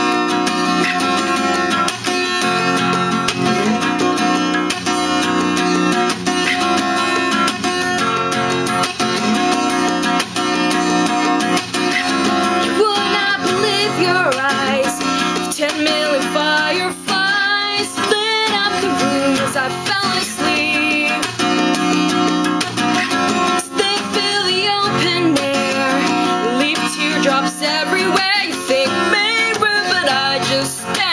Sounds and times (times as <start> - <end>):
Music: 0.0 - 31.1.